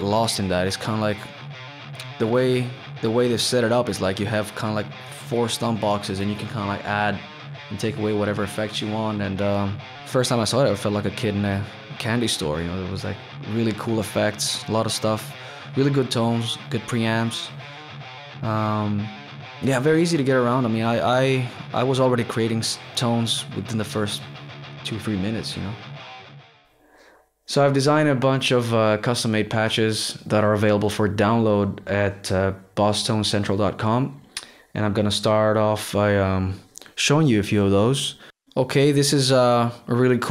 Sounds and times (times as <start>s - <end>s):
Speech: 0.0s - 1.3s, 2.0s - 17.5s, 18.4s - 25.8s, 27.5s - 40.3s
Electric guitar: 0.0s - 26.6s
Strum: 0.8s - 26.4s.